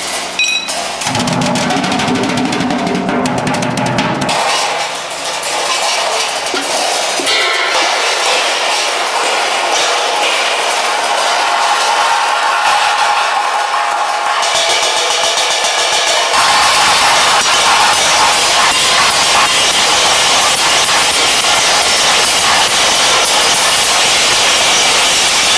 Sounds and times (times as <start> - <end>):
Hi-hat: 14.6 - 25.5.